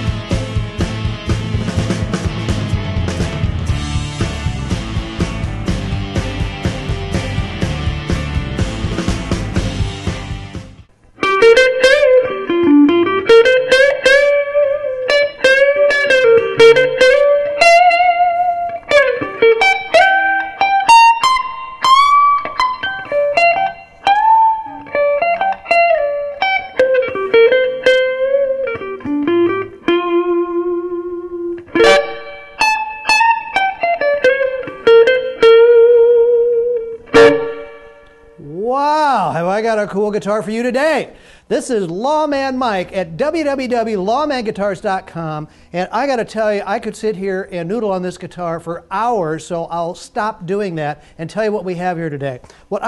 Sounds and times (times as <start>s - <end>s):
Strum: 0.0s - 39.5s
Electric guitar: 0.0s - 39.6s.